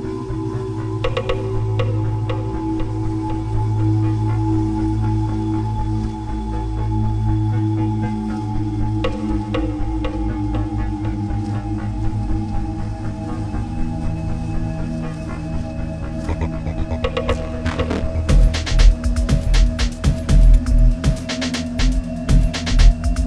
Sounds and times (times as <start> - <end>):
Music: 0.0 - 23.2.